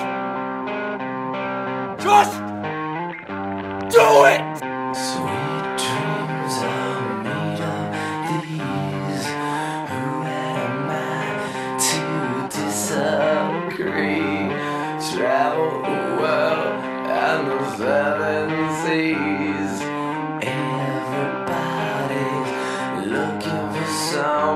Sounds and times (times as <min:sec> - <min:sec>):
Music: 0:00.0 - 0:24.5.